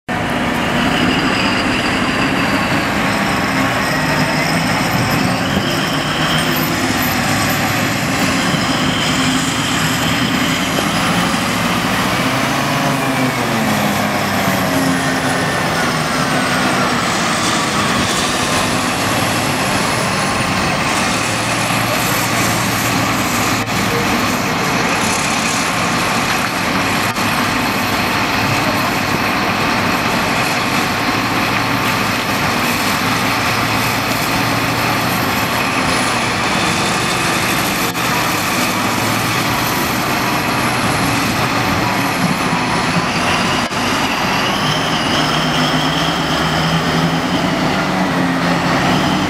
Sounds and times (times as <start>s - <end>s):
Truck: 0.0s - 49.2s.